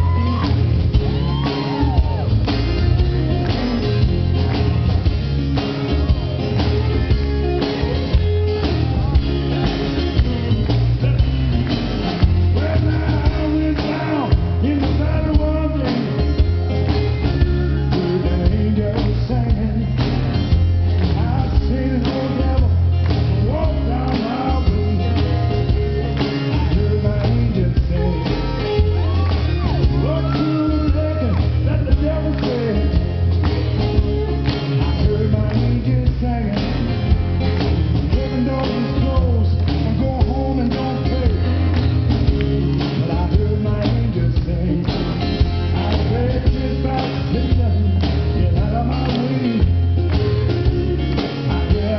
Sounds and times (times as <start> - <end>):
Music: 0.0 - 51.9
Male singing: 12.6 - 16.3, 17.1 - 20.0, 21.2 - 29.2, 30.0 - 33.1, 34.8 - 36.9, 38.0 - 41.7, 42.3 - 45.1, 45.7 - 49.8, 50.4 - 51.9.